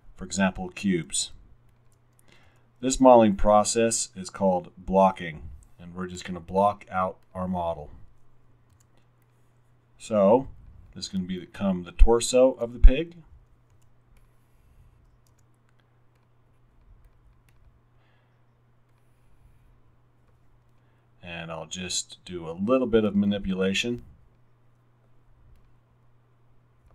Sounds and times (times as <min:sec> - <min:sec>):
Speech: 0:00.2 - 0:01.4, 0:02.8 - 0:08.0, 0:10.0 - 0:13.3, 0:21.2 - 0:24.1.